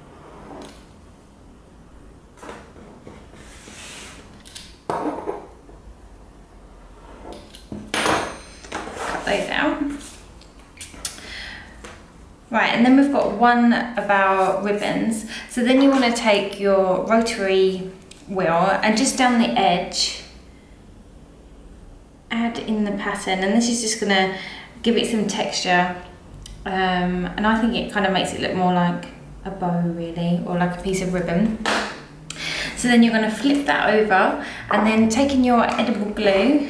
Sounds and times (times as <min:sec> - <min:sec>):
Speech: 0:09.2 - 0:10.0, 0:12.5 - 0:20.3, 0:22.3 - 0:26.0, 0:26.6 - 0:31.6, 0:32.8 - 0:36.6.